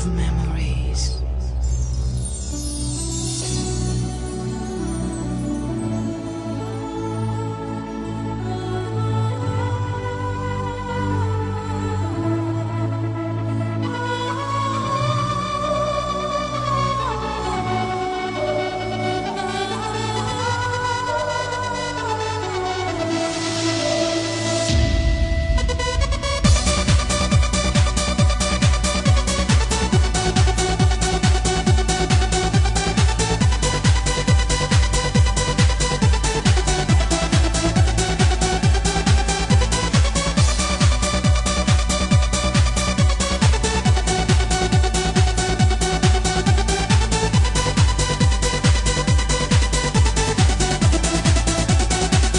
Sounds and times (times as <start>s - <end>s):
Techno: 9.3s - 52.3s.